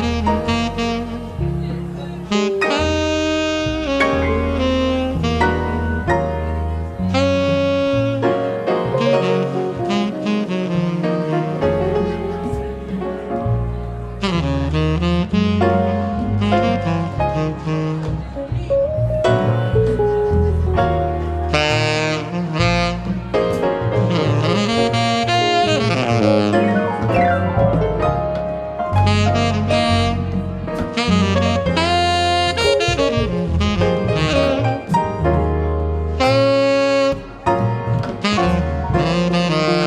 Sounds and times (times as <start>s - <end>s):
Brass instrument: 0.0s - 39.8s
Saxophone: 0.0s - 39.8s.